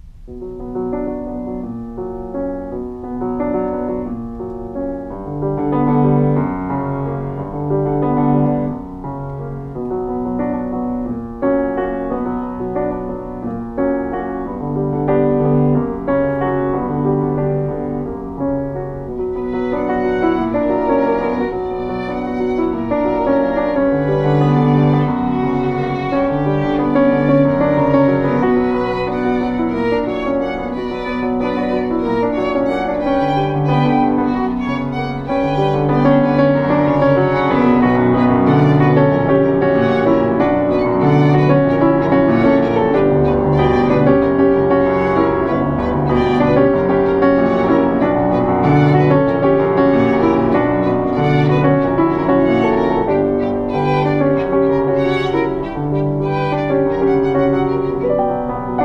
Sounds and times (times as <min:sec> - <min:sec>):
Violin, fiddle: 0:19.3 - 0:58.8.